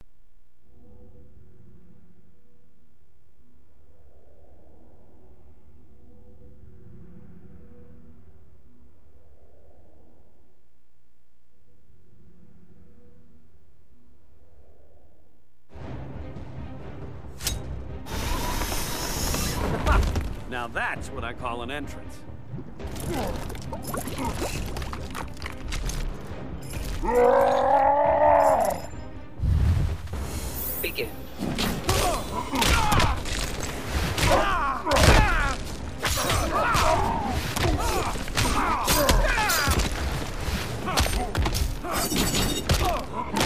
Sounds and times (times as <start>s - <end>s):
Music: 0.7s - 3.7s, 5.3s - 9.3s, 15.7s - 43.4s.